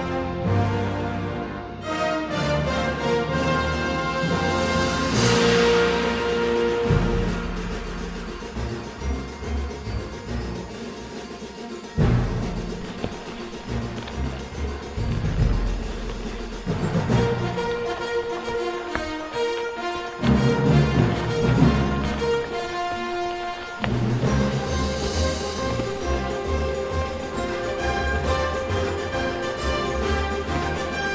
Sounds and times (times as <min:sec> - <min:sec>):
Music: 0:00.0 - 0:31.1
Clip-clop: 0:11.3 - 0:31.1.